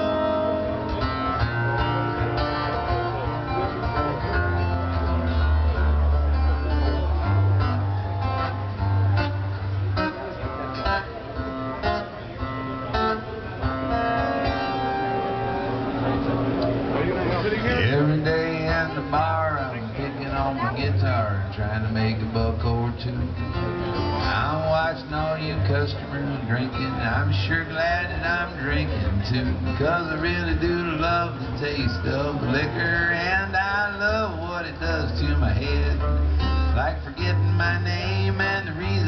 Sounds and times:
Music: 0.0s - 39.0s
Speech: 16.0s - 23.2s, 24.4s - 33.3s
Male singing: 17.6s - 23.5s, 24.2s - 39.0s.

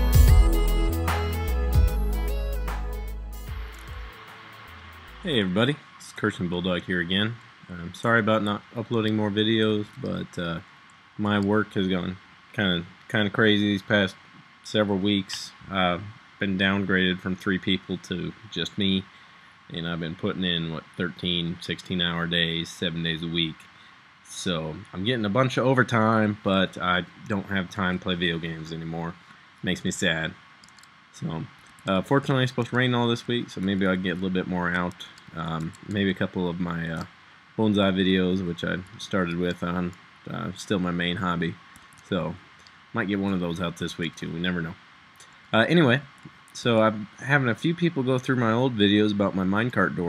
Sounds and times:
Speech: 5.2s - 10.6s, 11.2s - 19.1s, 19.7s - 23.6s, 24.3s - 30.4s, 31.2s - 42.4s, 43.0s - 44.8s, 45.6s - 50.0s.

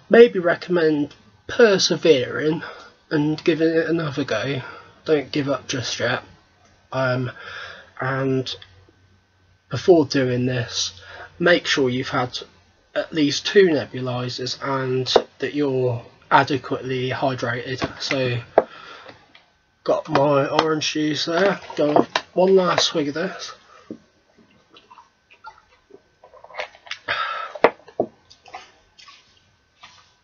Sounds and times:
Speech: 0.1s - 6.3s, 6.9s - 7.4s, 8.0s - 8.6s, 9.7s - 18.6s, 19.9s - 23.6s.

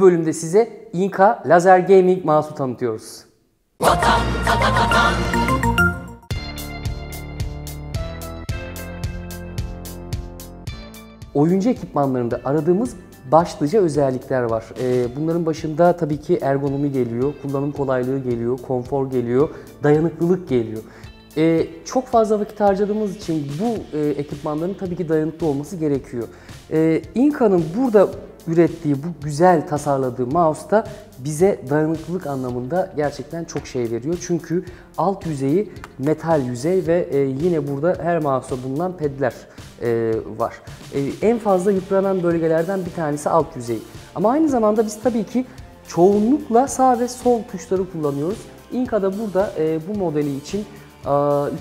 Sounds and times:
Speech: 0.0s - 3.3s, 11.3s - 51.6s
Music: 3.8s - 51.6s.

